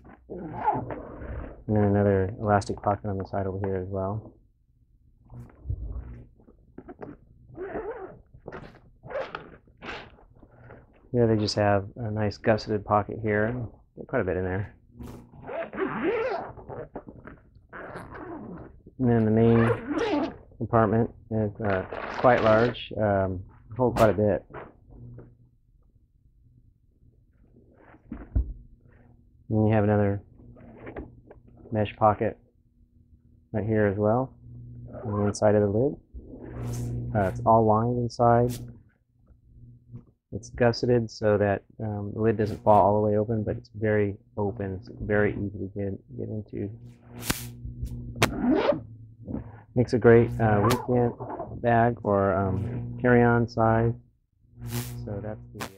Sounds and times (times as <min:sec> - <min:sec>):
Speech: 0:01.7 - 0:04.3, 0:11.1 - 0:14.7, 0:19.0 - 0:20.0, 0:20.6 - 0:24.5, 0:29.5 - 0:30.2, 0:31.7 - 0:32.4, 0:33.5 - 0:34.3, 0:34.9 - 0:36.0, 0:37.2 - 0:38.6, 0:40.4 - 0:46.8, 0:49.8 - 0:54.0, 0:55.0 - 0:55.7.